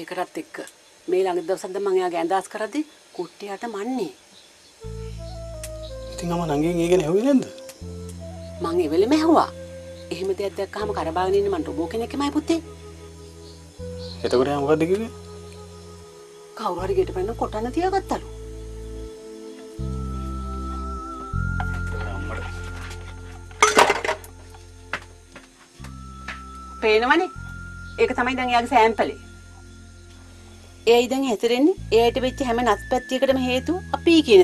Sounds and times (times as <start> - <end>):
Music: 4.8 - 34.4.